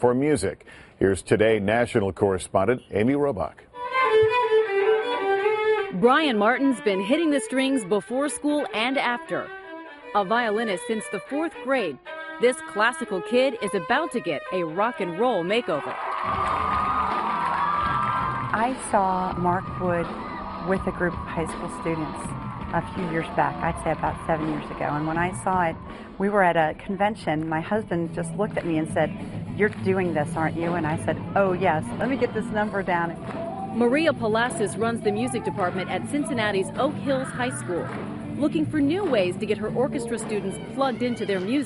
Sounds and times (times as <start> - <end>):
Speech: 0.0 - 3.6, 6.0 - 9.5, 10.2 - 15.9, 18.6 - 20.1, 20.7 - 22.2, 22.8 - 33.1, 33.8 - 41.6
Music: 3.7 - 41.6.